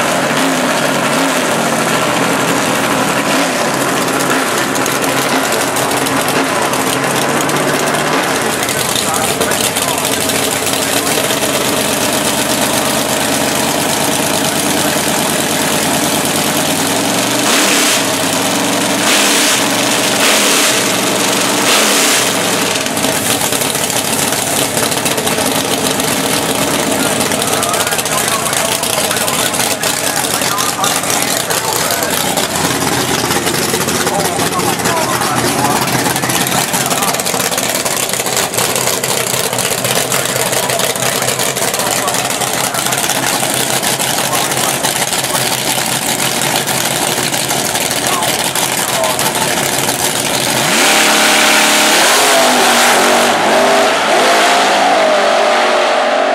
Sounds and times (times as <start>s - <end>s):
Idling: 0.0s - 53.8s
Car: 0.0s - 56.3s.